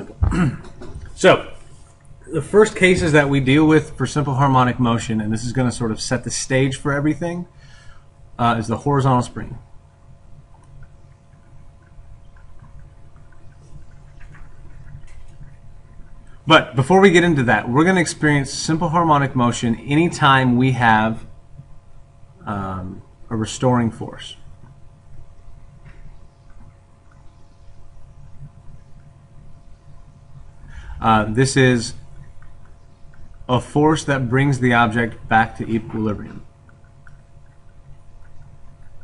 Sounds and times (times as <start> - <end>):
Speech: 1.2 - 1.6, 2.3 - 7.6, 8.4 - 9.7, 16.5 - 21.3, 22.4 - 24.5, 31.0 - 32.0, 33.5 - 36.5.